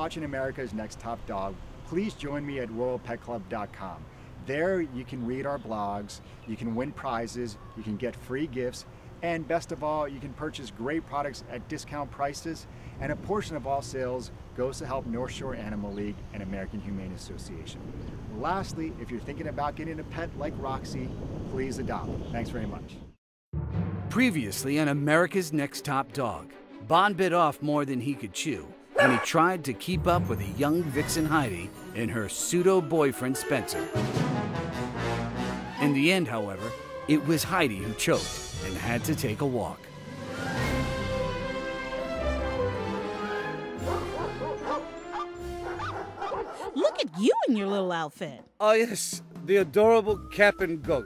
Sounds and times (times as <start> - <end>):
Speech: 0.0 - 23.0, 24.1 - 33.9, 35.8 - 39.8, 46.8 - 51.0
Music: 23.6 - 46.3, 48.1 - 51.0
Bow-wow: 29.0 - 29.3, 43.8 - 47.1.